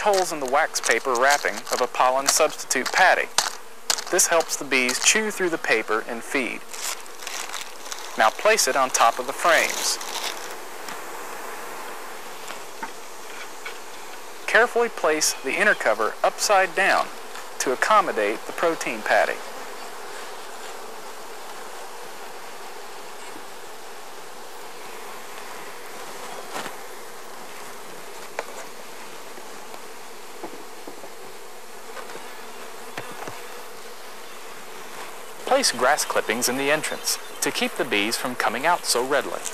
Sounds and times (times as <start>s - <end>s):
Speech: 0.0s - 3.3s, 4.1s - 6.6s, 8.2s - 10.0s, 14.5s - 19.4s, 35.4s - 39.5s
Bee, wasp, etc.: 0.0s - 39.5s.